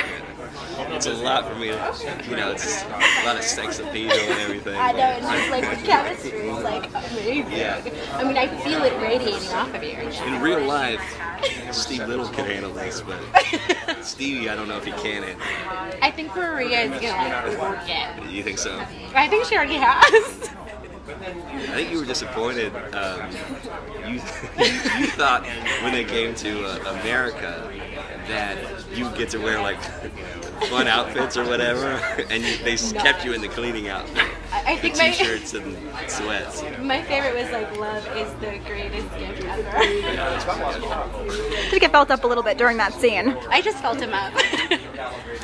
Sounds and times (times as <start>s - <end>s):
Chatter: 0.0s - 45.4s
Speech: 0.0s - 45.4s.